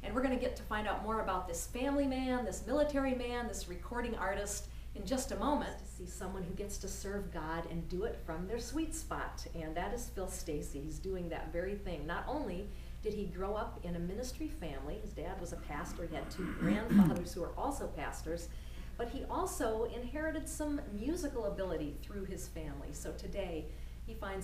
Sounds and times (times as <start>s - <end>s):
Speech: 0.0s - 24.4s.